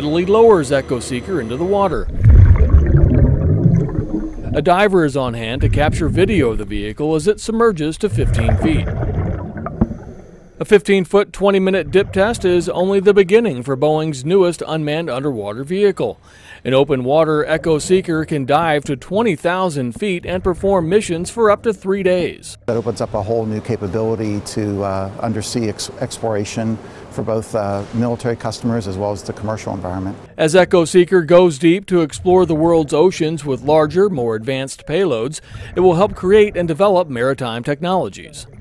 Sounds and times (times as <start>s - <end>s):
Speech: 0.0s - 2.1s, 4.5s - 8.9s, 10.6s - 38.6s.